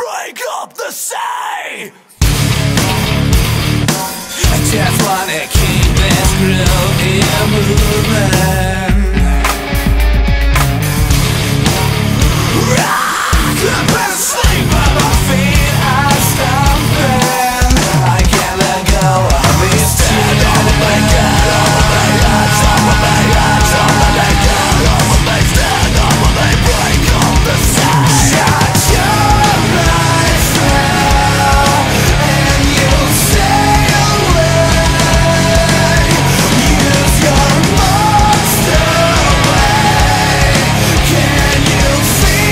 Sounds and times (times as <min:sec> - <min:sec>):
Music: 0:02.2 - 0:42.5.